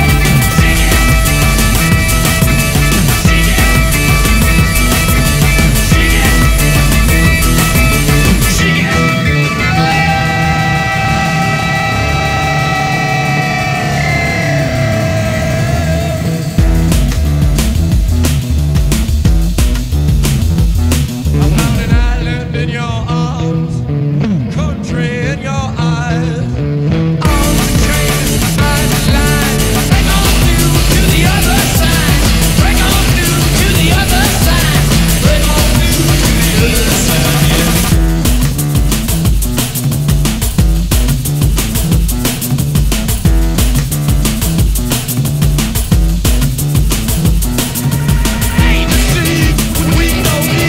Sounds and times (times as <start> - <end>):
Music: 0.0 - 50.6.